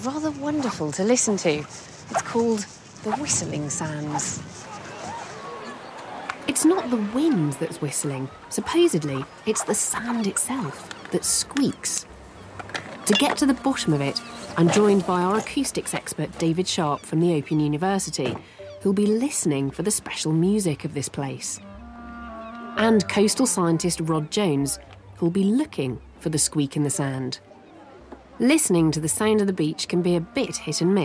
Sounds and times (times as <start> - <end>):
Speech: 0.0 - 1.6, 2.2 - 4.4, 6.5 - 12.0, 13.1 - 21.6, 22.8 - 27.4, 28.4 - 31.0
Music: 11.1 - 31.0.